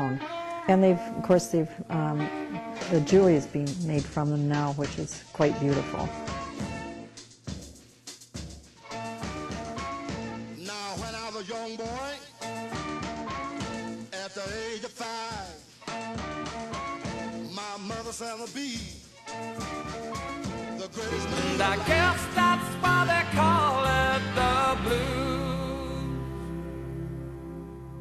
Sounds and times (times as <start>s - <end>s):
Speech: 0.0s - 6.1s
Swing music: 0.0s - 28.0s.